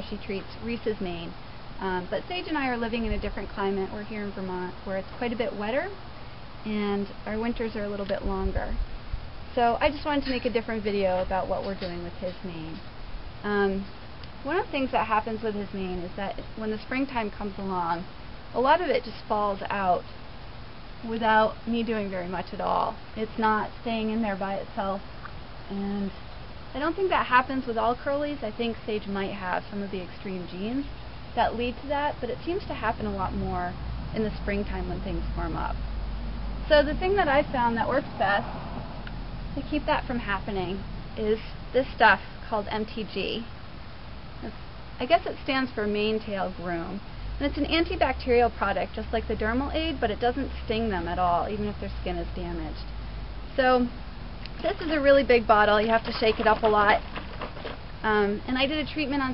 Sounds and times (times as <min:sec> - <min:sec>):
Speech: 0:00.0 - 0:06.0, 0:06.6 - 0:08.8, 0:09.5 - 0:12.8, 0:13.4 - 0:20.1, 0:21.0 - 0:25.0, 0:25.7 - 0:26.2, 0:26.8 - 0:35.8, 0:36.7 - 0:38.4, 0:39.6 - 0:43.5, 0:44.4 - 0:52.9, 0:53.6 - 0:54.0, 0:54.6 - 0:57.1, 0:58.0 - 0:59.3.